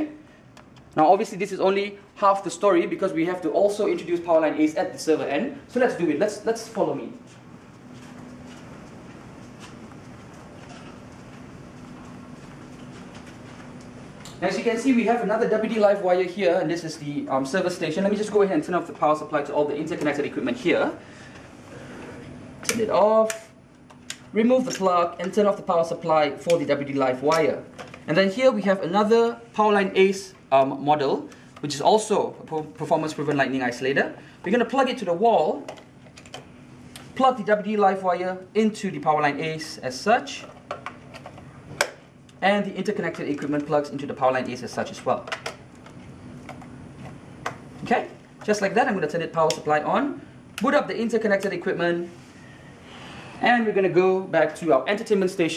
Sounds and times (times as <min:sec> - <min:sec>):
Speech: 0:00.0 - 0:00.2, 0:01.0 - 0:07.2, 0:14.3 - 0:21.0, 0:22.6 - 0:23.5, 0:24.3 - 0:35.7, 0:37.2 - 0:40.5, 0:42.4 - 0:45.4, 0:47.8 - 0:52.1, 0:53.4 - 0:55.5.